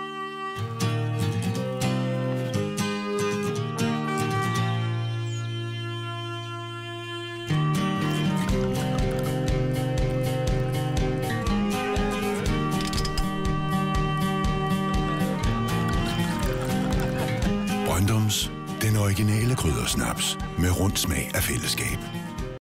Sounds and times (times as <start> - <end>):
Music: 0.0 - 22.6
Speech: 17.8 - 22.0.